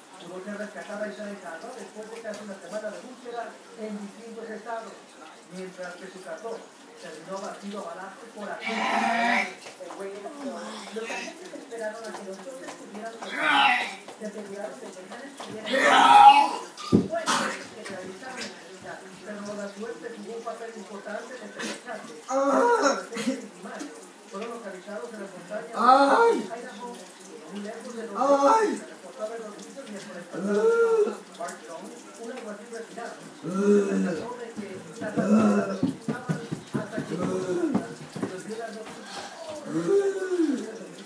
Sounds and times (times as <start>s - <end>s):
Water: 0.0s - 41.0s.